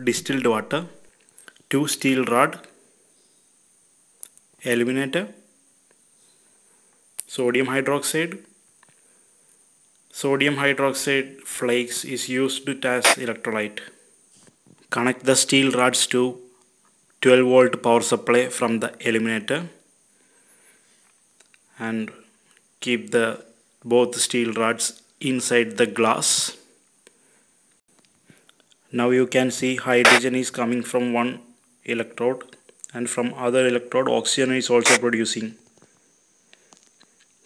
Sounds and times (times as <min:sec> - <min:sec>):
Speech: 0:00.0 - 0:01.1, 0:01.7 - 0:02.8, 0:04.6 - 0:05.4, 0:07.2 - 0:08.5, 0:10.1 - 0:14.0, 0:14.9 - 0:16.5, 0:17.2 - 0:19.8, 0:21.8 - 0:26.7, 0:28.9 - 0:35.7.